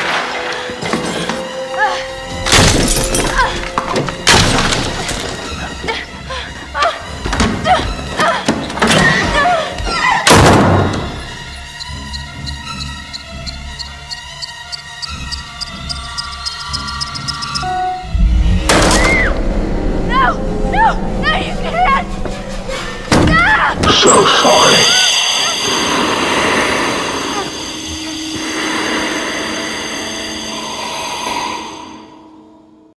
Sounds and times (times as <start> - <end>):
Speech: 23.8 - 25.0.